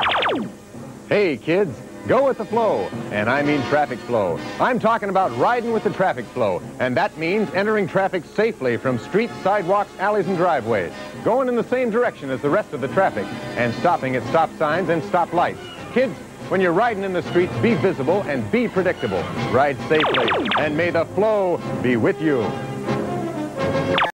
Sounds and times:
Music: 0.0 - 24.1
Speech: 1.1 - 22.6.

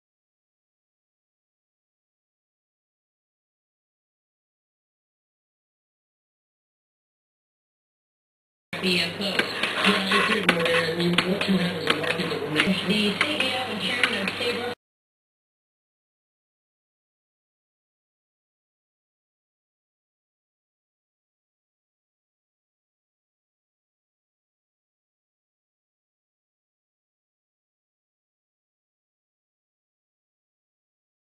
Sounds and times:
Speech: 8.8 - 14.8.

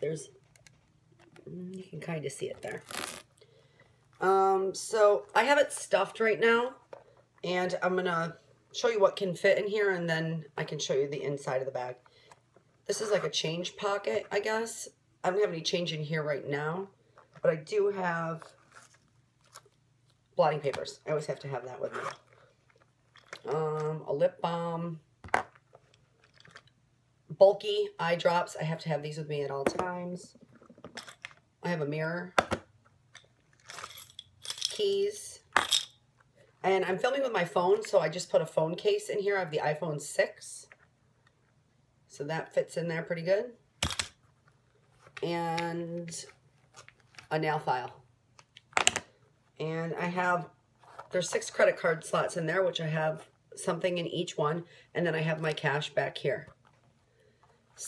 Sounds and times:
Speech: 0.0 - 0.4, 1.4 - 2.9, 4.2 - 6.8, 7.4 - 12.0, 12.9 - 18.6, 20.4 - 22.1, 23.5 - 25.0, 27.3 - 30.4, 31.6 - 32.4, 34.7 - 35.5, 36.6 - 40.8, 42.1 - 43.6, 45.2 - 46.4, 47.3 - 48.0, 49.6 - 56.6
Inside, small room: 0.0 - 57.8.

